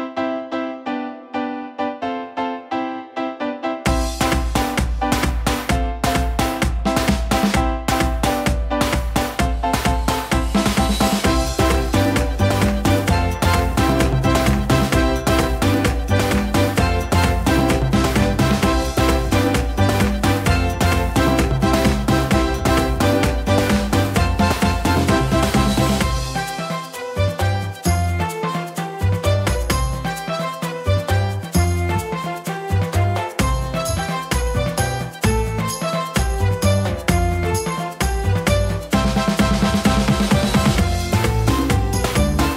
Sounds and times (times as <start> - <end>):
Music: 0.0 - 42.5.